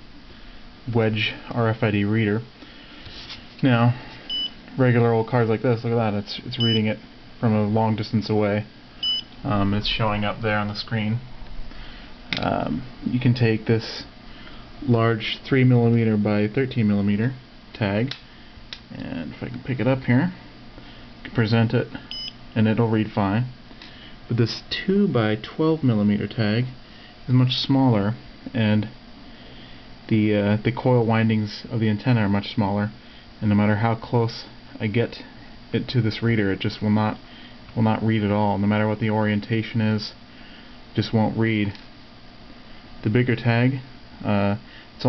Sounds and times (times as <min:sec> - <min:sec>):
Speech: 0:00.9 - 0:02.5, 0:03.6 - 0:04.0, 0:04.7 - 0:08.7, 0:09.4 - 0:11.3, 0:12.4 - 0:14.1, 0:14.8 - 0:18.2, 0:18.9 - 0:20.4, 0:21.3 - 0:22.0, 0:22.6 - 0:23.6, 0:24.3 - 0:29.0, 0:30.1 - 0:37.2, 0:37.8 - 0:40.2, 0:41.0 - 0:41.8, 0:43.0 - 0:45.0.